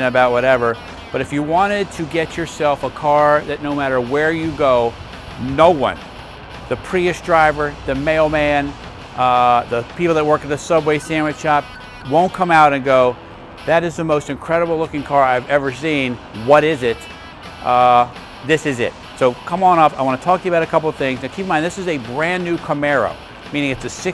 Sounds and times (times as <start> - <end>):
Speech: 0.0 - 6.0, 6.7 - 24.1
Music: 0.0 - 24.1.